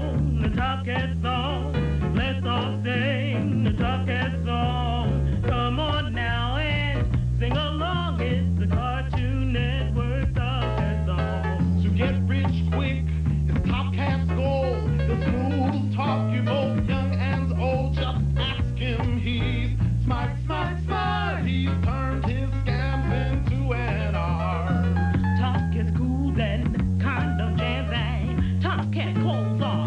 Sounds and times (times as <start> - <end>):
Music: 0.0 - 29.8.